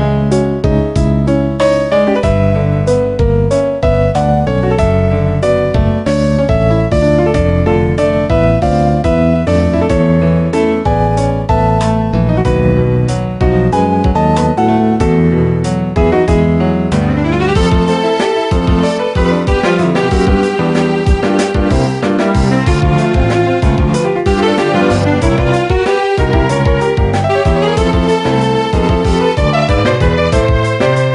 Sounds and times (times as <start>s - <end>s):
Video game music: 0.0s - 31.1s.